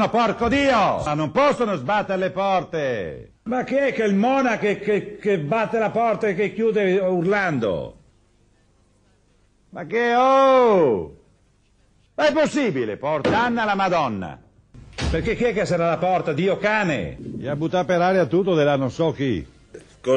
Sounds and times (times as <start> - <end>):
Speech: 0.0 - 8.0, 9.8 - 11.2, 12.2 - 14.5, 15.1 - 20.1.